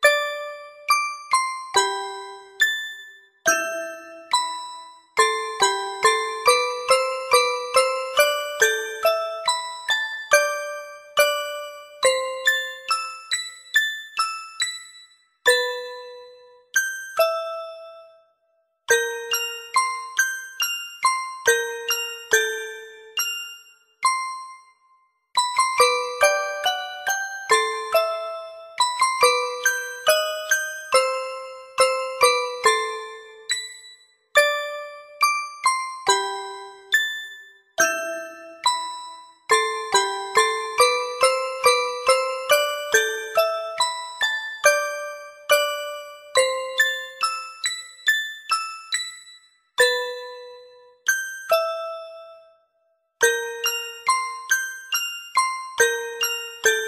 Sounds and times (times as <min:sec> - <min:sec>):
Music: 0:00.0 - 0:56.8.